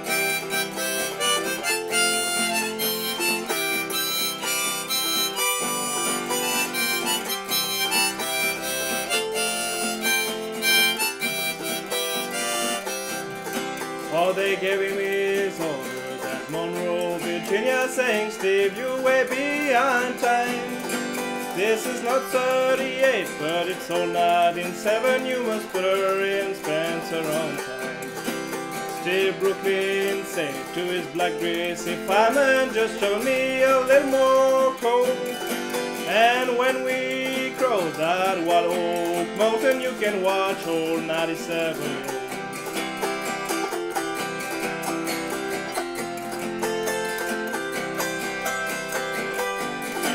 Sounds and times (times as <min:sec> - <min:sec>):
Music: 0:00.0 - 0:50.1.